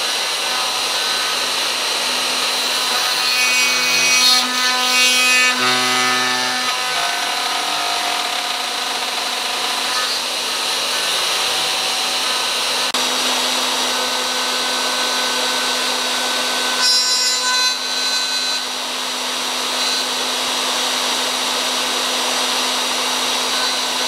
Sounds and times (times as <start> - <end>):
Wood: 0.0 - 13.0
Drill: 0.0 - 24.0.